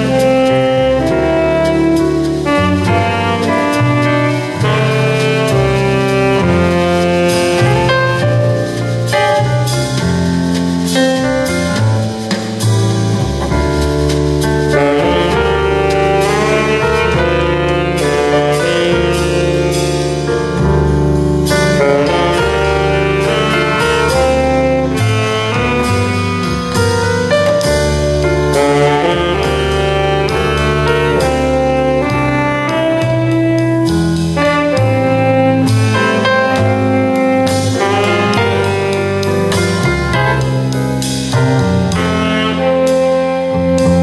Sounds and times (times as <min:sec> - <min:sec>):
Saxophone: 0:00.0 - 0:10.2, 0:14.5 - 0:44.0.